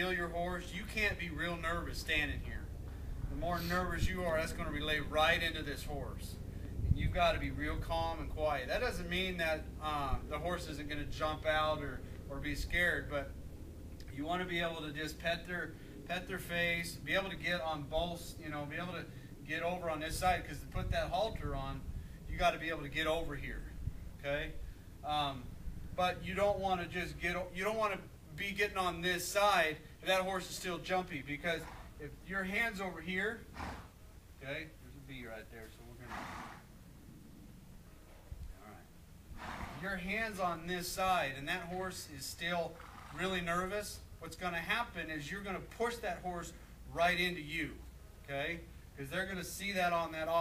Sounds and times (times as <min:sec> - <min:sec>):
Speech: 0:00.0 - 0:02.7, 0:03.3 - 0:06.4, 0:07.0 - 0:13.3, 0:14.1 - 0:33.4, 0:34.4 - 0:36.2, 0:39.8 - 0:50.4.